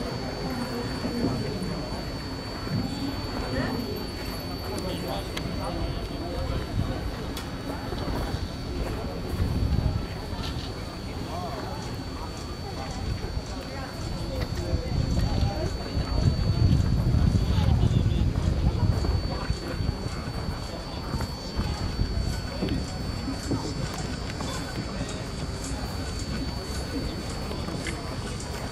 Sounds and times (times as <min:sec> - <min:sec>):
Speech: 0:00.0 - 0:28.7.